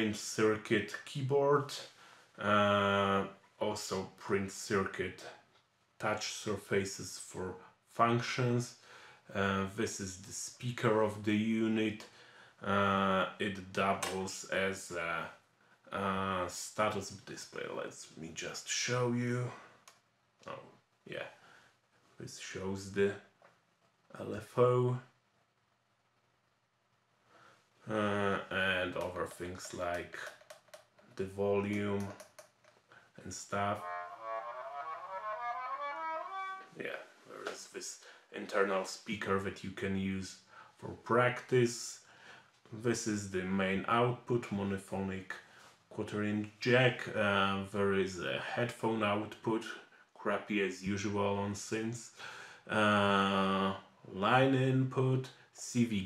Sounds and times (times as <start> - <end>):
Speech: 0.0 - 19.7, 20.4 - 21.4, 22.2 - 23.3, 24.1 - 25.2, 27.9 - 30.3, 31.2 - 32.2, 33.2 - 34.0, 36.7 - 42.1, 42.7 - 56.0
Musical instrument: 33.7 - 36.8.